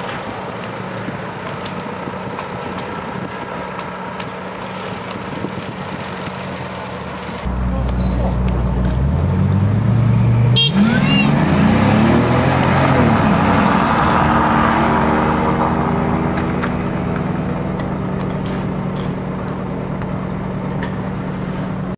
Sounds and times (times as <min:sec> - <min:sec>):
Car: 0:00.0 - 0:21.9
Accelerating, revving, vroom: 0:08.8 - 0:17.7.